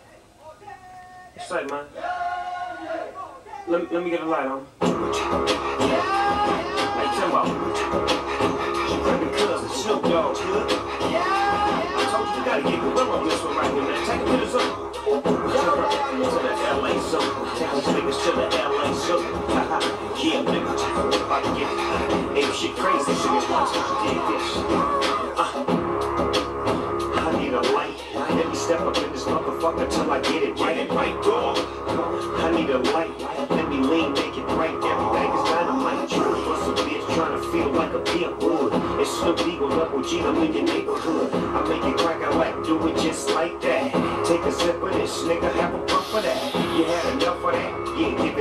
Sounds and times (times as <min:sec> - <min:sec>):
Inside, small room: 0:00.0 - 0:48.4
Music: 0:04.6 - 0:48.4.